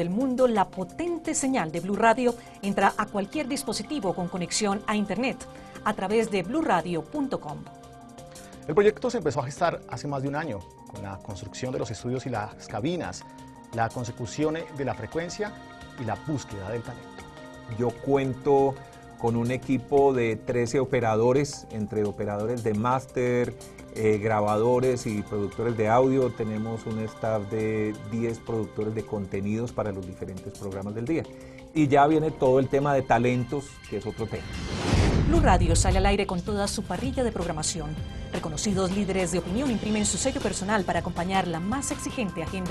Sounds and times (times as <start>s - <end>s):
Music: 0.0s - 42.7s
Speech: 17.7s - 34.5s, 35.3s - 42.7s.